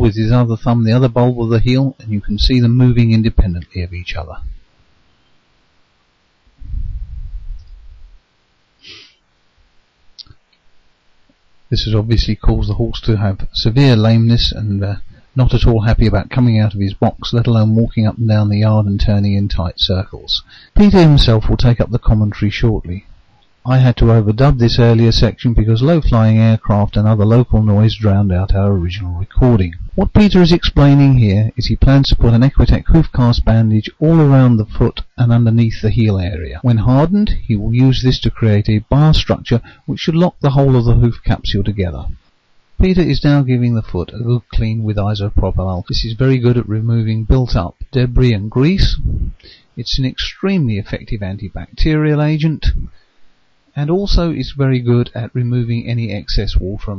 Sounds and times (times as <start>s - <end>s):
Speech: 0.0s - 4.6s, 11.7s - 42.2s, 42.8s - 53.0s, 53.7s - 56.9s.